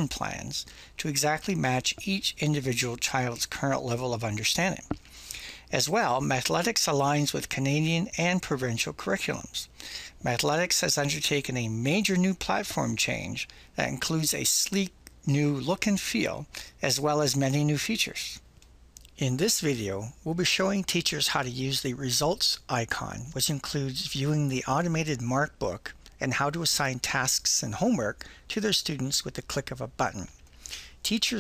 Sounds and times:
Speech: 0.0 - 5.0, 5.7 - 18.4, 19.0 - 30.4, 31.0 - 31.4.

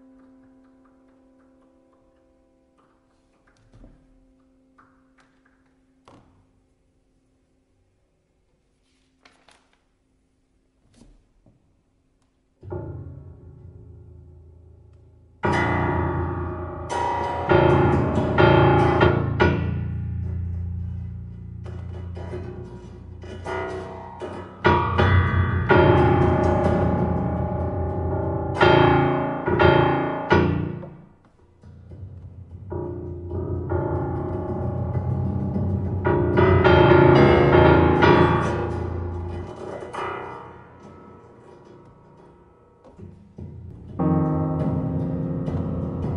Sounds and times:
Piano: 0.0 - 8.7, 11.5 - 46.1.

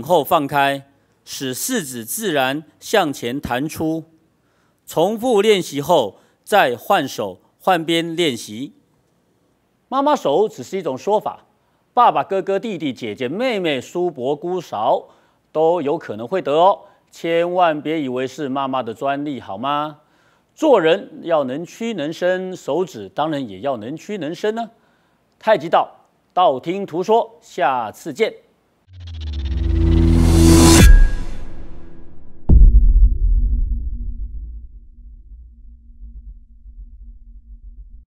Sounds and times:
Speech: 0.0 - 4.2, 4.9 - 8.8, 9.9 - 20.0, 20.6 - 24.8, 25.4 - 28.5
Music: 29.1 - 37.0.

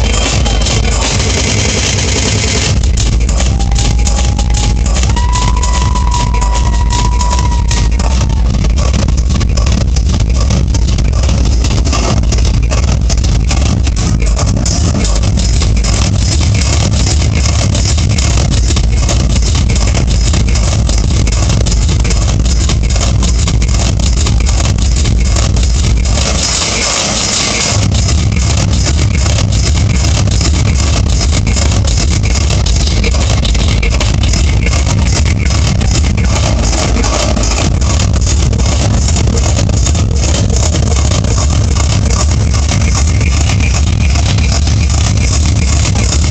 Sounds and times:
Techno: 0.0 - 46.3.

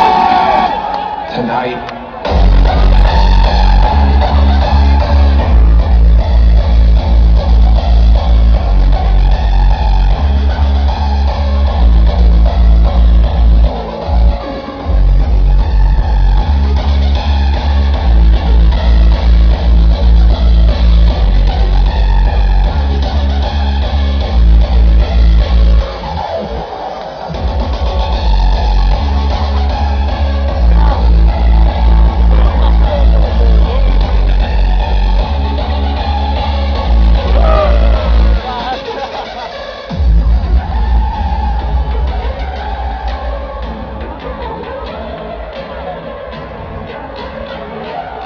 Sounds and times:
Techno: 0.0 - 48.2.

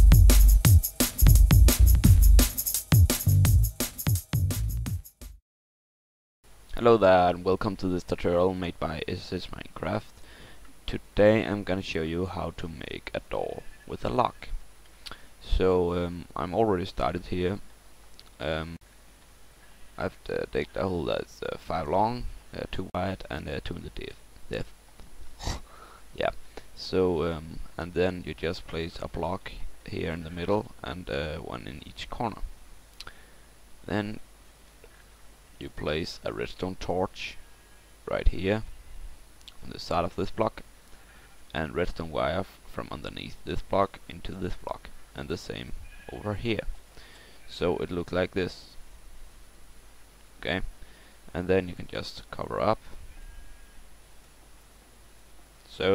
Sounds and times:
Speech: 6.7 - 10.2, 10.9 - 14.6, 15.4 - 17.6, 18.4 - 18.8, 20.0 - 24.7, 26.2 - 32.5, 33.9 - 34.2, 35.6 - 37.4, 38.1 - 38.7, 39.5 - 40.6, 41.5 - 46.8, 47.5 - 48.8, 50.4 - 50.7, 51.3 - 52.8, 55.7 - 55.9.

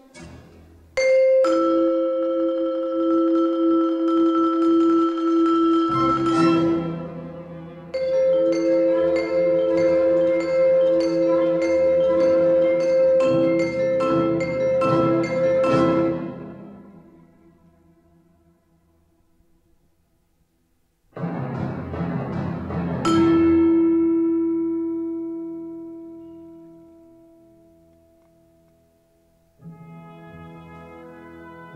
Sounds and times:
Percussion: 0.0 - 17.2, 21.1 - 29.0.

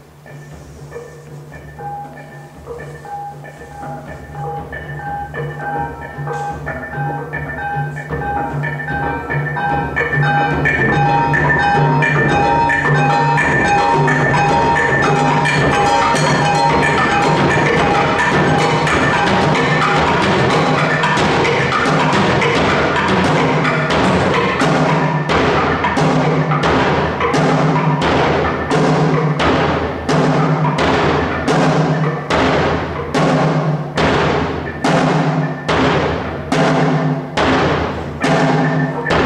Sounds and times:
Wood block: 0.2 - 39.2.

